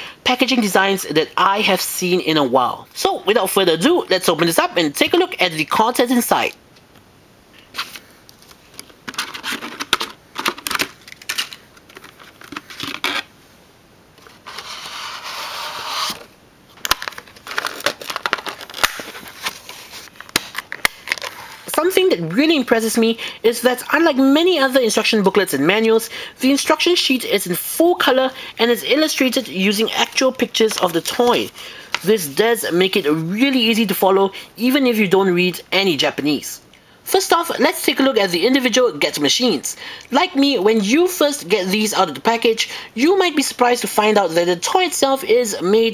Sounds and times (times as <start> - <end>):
Speech: 0.2 - 6.6, 21.7 - 45.9.